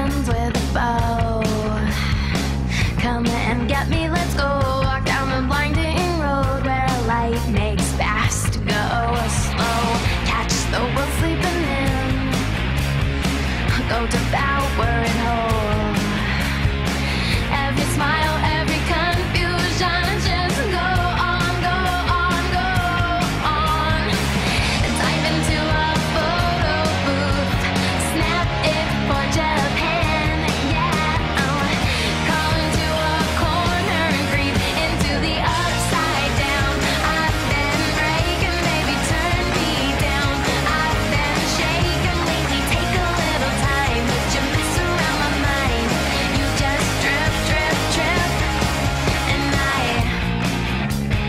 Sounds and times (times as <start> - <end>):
Music: 0.0 - 51.2.